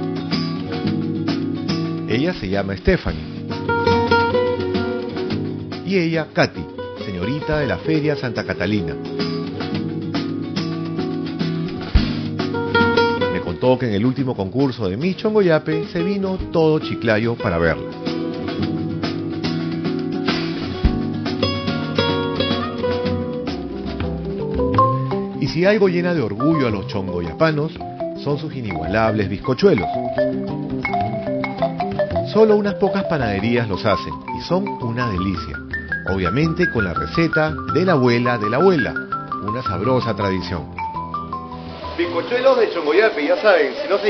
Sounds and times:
Speech: 0:02.1 - 0:03.2, 0:05.8 - 0:09.0, 0:13.3 - 0:17.8, 0:25.4 - 0:29.9, 0:32.3 - 0:40.7, 0:42.0 - 0:44.0
Marimba, xylophone: 0:24.0 - 0:42.4.

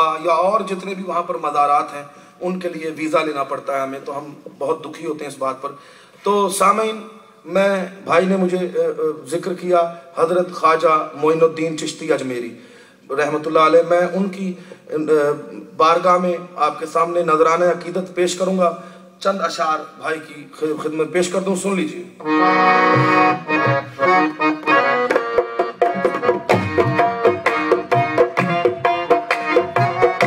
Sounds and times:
Speech: 0:00.0 - 0:22.2
Music: 0:22.2 - 0:30.2.

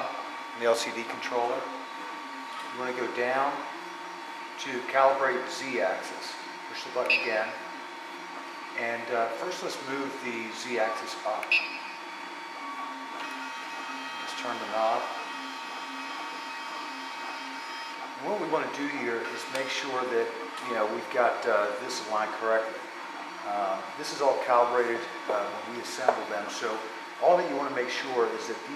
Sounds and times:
Speech: 0:00.0 - 0:01.8, 0:02.7 - 0:03.7, 0:04.6 - 0:07.6, 0:08.8 - 0:11.5, 0:14.3 - 0:15.2, 0:18.2 - 0:22.8, 0:23.4 - 0:28.7.

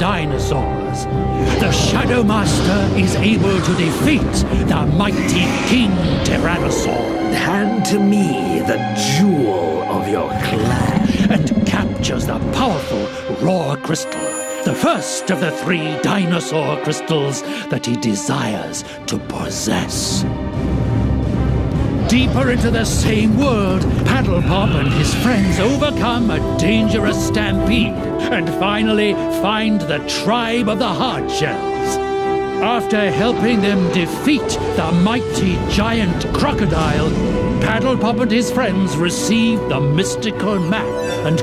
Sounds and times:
Speech: 0:00.0 - 0:20.3, 0:22.0 - 0:32.0, 0:32.6 - 0:41.4
Music: 0:00.0 - 0:41.4.

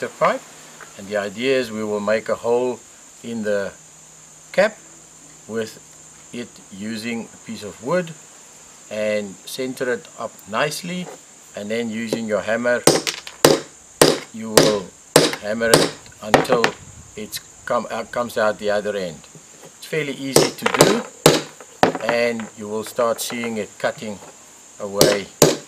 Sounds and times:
Speech: 0:00.0 - 0:00.4, 0:01.0 - 0:03.8, 0:04.5 - 0:04.8, 0:05.5 - 0:05.8, 0:06.4 - 0:08.2, 0:08.9 - 0:12.9, 0:14.4 - 0:21.1, 0:22.0 - 0:25.3.

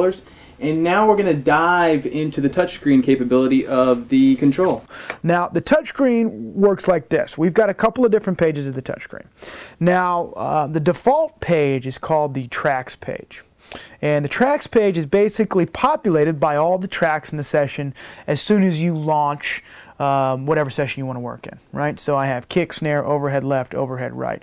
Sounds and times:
Speech: 0:00.0 - 0:13.4, 0:14.0 - 0:24.4.

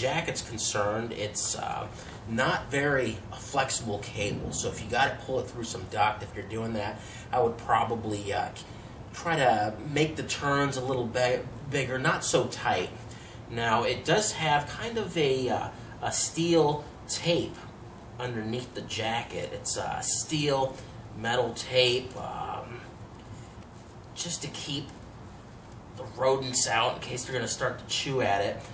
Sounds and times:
Speech: 0:00.0 - 0:22.9, 0:24.2 - 0:25.0, 0:26.0 - 0:28.7.

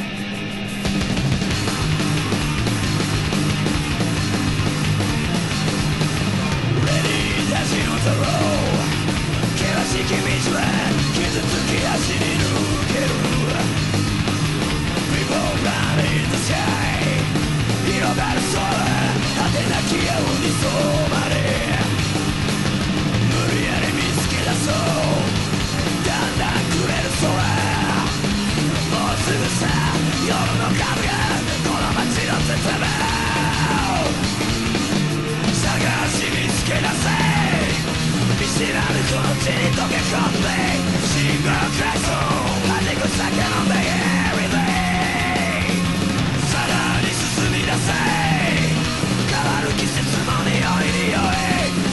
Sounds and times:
Music: 0:00.0 - 0:51.9
Male singing: 0:06.8 - 0:08.8, 0:09.6 - 0:13.7, 0:15.1 - 0:21.9, 0:23.3 - 0:25.3, 0:26.0 - 0:28.1, 0:28.9 - 0:34.2, 0:35.5 - 0:37.8, 0:38.4 - 0:45.8, 0:46.4 - 0:51.9.

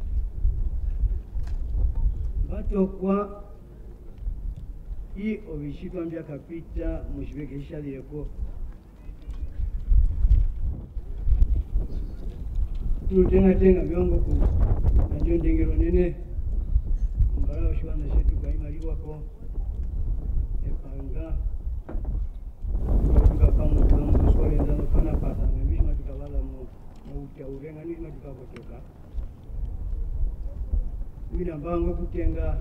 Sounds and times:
Male speech, man speaking: 0:02.4 - 0:03.6, 0:05.2 - 0:08.4, 0:13.1 - 0:16.3, 0:17.3 - 0:19.4, 0:20.6 - 0:21.5, 0:23.1 - 0:28.9, 0:31.3 - 0:32.6.

